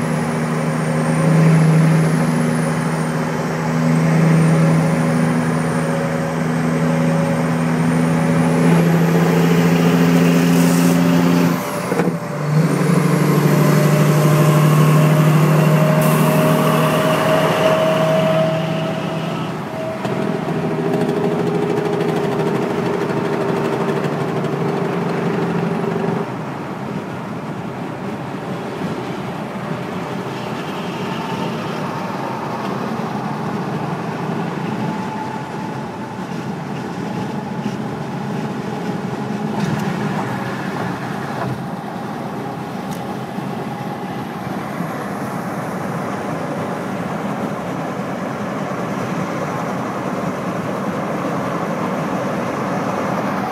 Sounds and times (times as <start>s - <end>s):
Car: 0.0s - 53.5s
Truck: 0.0s - 53.5s.